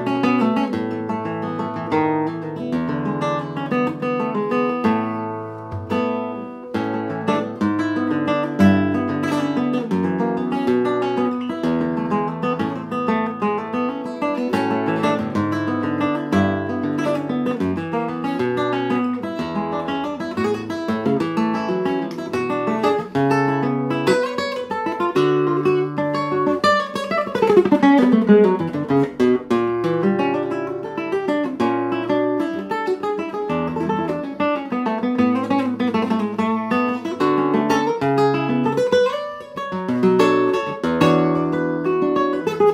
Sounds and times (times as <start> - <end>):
Guitar: 0.0 - 42.7.